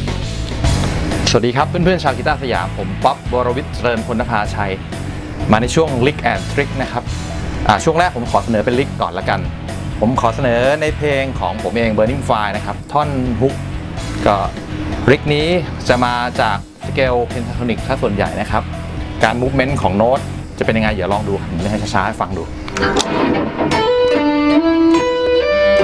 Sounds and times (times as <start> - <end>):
Music: 0.0 - 25.8
Speech: 1.3 - 4.8, 5.5 - 7.1, 7.7 - 13.6, 14.2 - 18.6, 19.2 - 22.5.